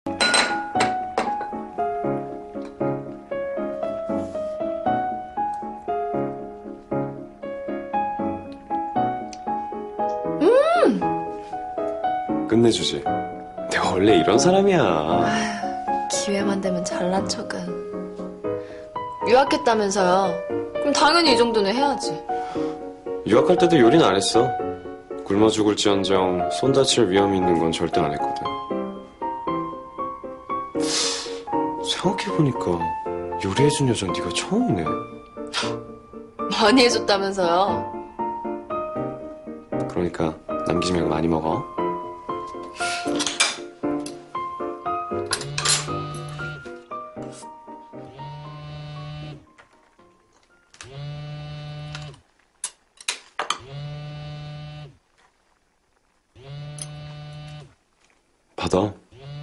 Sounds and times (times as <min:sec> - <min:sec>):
Music: 0:00.1 - 0:52.2.